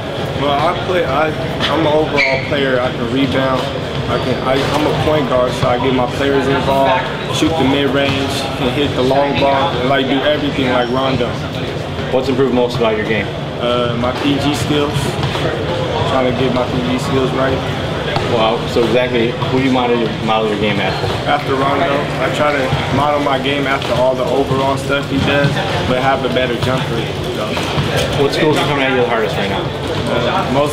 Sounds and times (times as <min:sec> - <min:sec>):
Speech: 0:00.4 - 0:30.7.